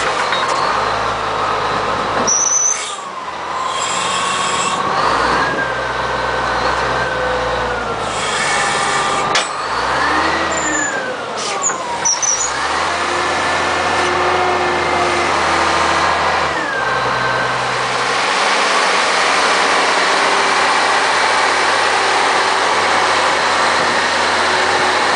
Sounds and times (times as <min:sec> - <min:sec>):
Truck: 0:00.0 - 0:25.1.